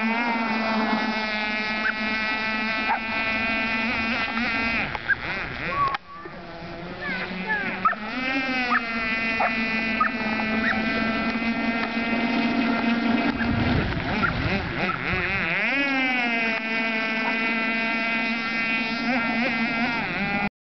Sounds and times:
Motorboat, speedboat: 0:00.0 - 0:20.5.

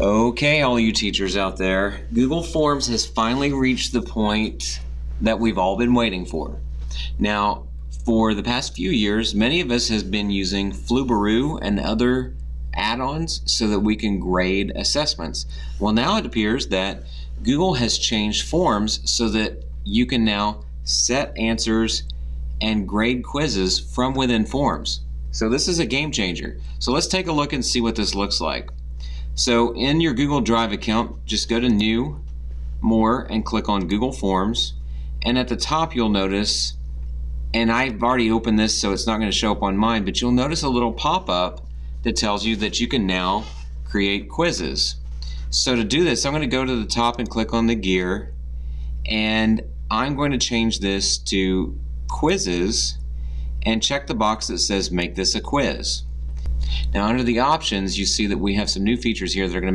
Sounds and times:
Speech: 0:00.0 - 0:28.8, 0:29.4 - 0:32.2, 0:32.8 - 0:36.8, 0:37.6 - 0:48.4, 0:49.1 - 0:53.0, 0:53.6 - 0:56.1, 0:56.7 - 0:59.7.

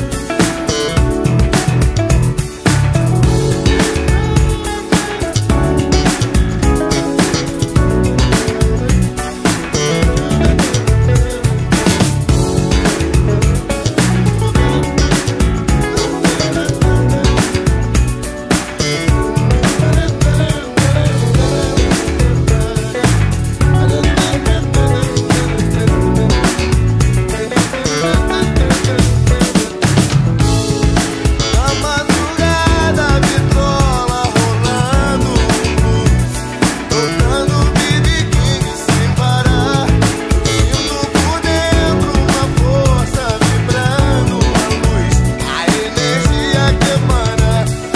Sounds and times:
Bass guitar: 0:00.0 - 0:47.9.

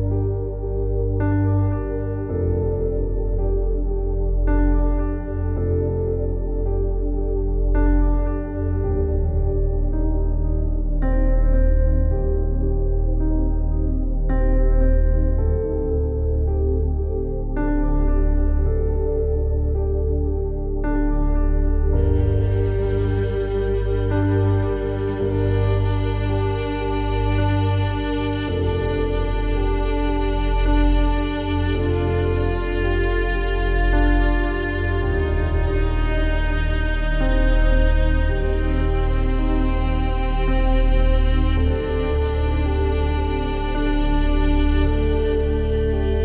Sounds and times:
Music: 0:00.0 - 0:46.2.

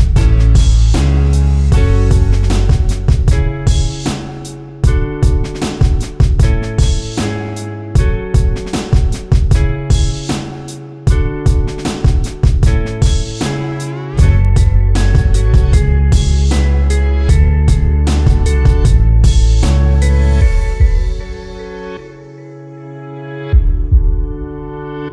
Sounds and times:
Music: 0:00.0 - 0:25.1.

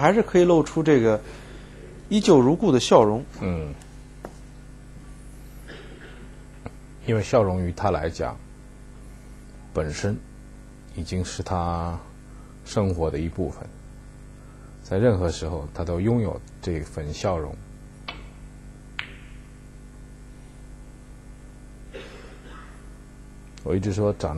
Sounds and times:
Speech: 0:00.0 - 0:01.3, 0:02.1 - 0:03.8, 0:07.0 - 0:08.4, 0:09.7 - 0:10.3, 0:10.9 - 0:13.8, 0:14.8 - 0:17.6, 0:23.6 - 0:24.3.

